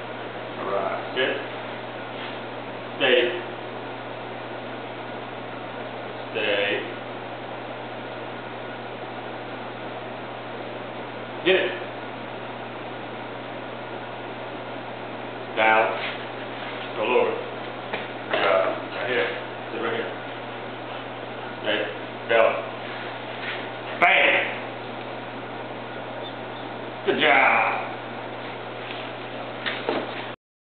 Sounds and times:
Speech: 0:00.6 - 0:01.5, 0:03.0 - 0:03.6, 0:06.3 - 0:07.0, 0:11.4 - 0:11.9, 0:15.6 - 0:16.1, 0:17.0 - 0:17.5, 0:18.3 - 0:20.2, 0:21.6 - 0:22.8, 0:24.0 - 0:24.6, 0:27.1 - 0:28.0.

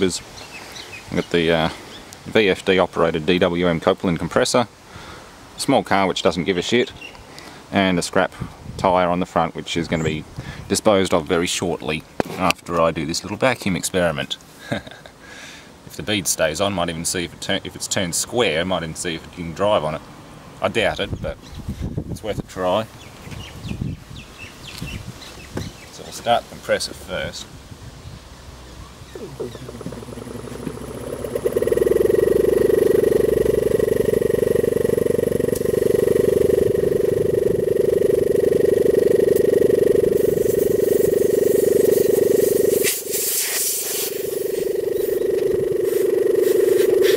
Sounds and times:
Outside, urban or manmade: 0:00.0 - 0:47.1
Speech: 0:01.1 - 0:04.7, 0:05.6 - 0:07.0, 0:07.7 - 0:14.4, 0:15.9 - 0:20.0, 0:20.6 - 0:21.4, 0:22.2 - 0:22.9, 0:26.0 - 0:27.5, 0:29.2 - 0:30.2.

